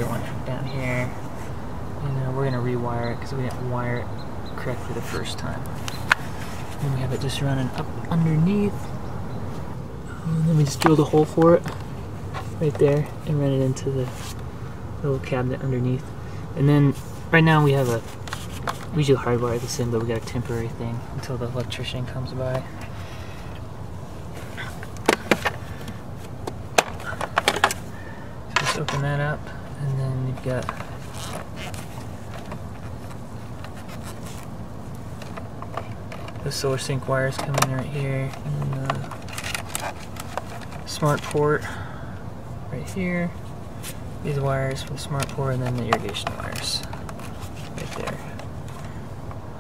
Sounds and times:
Speech: 0.0 - 1.2, 2.0 - 5.7, 6.8 - 8.9, 10.1 - 11.7, 12.6 - 14.2, 15.0 - 18.1, 18.9 - 22.7, 28.6 - 30.9, 36.4 - 39.2, 40.9 - 41.8, 42.7 - 43.4, 44.2 - 47.0, 47.8 - 48.4.

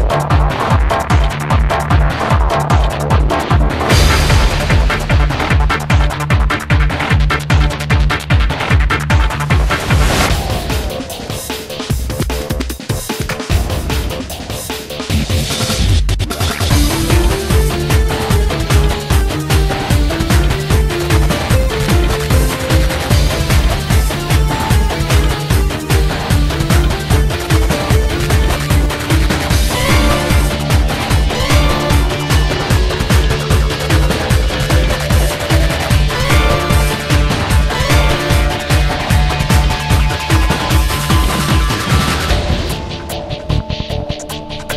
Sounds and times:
Trance music: 0.0 - 15.1, 16.6 - 44.7
Techno: 0.0 - 44.5
Drum and bass: 0.0 - 44.7.

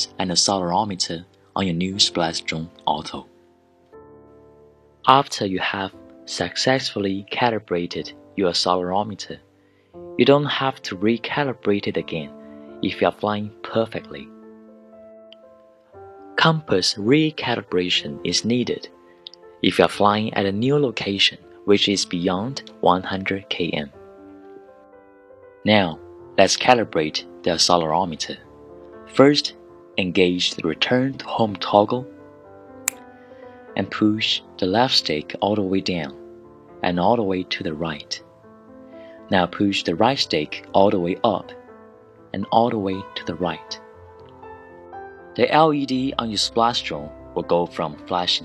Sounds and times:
Speech: 0.0 - 3.3, 5.1 - 9.4, 10.2 - 14.3, 16.4 - 19.0, 19.6 - 24.0, 25.6 - 28.5, 29.1 - 32.1, 33.8 - 36.2, 36.8 - 38.2, 39.3 - 41.6, 42.3 - 43.8, 45.4 - 48.4
Music: 0.0 - 48.4.

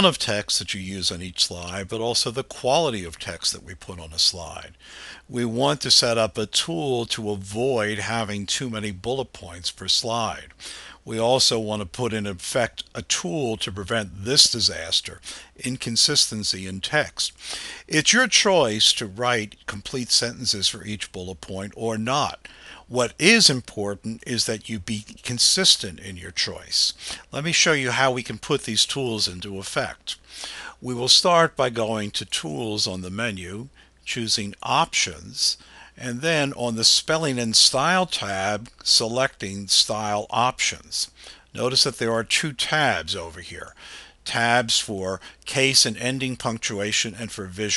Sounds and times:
Speech: 0.0 - 47.7.

